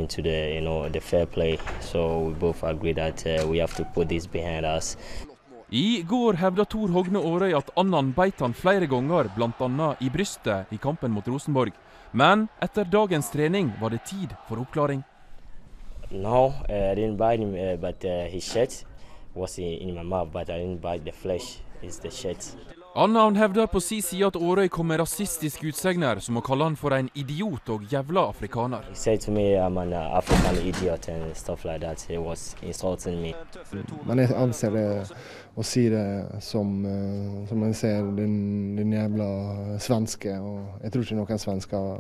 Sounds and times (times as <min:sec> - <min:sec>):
Speech: 0:00.0 - 0:15.0, 0:16.1 - 0:42.0.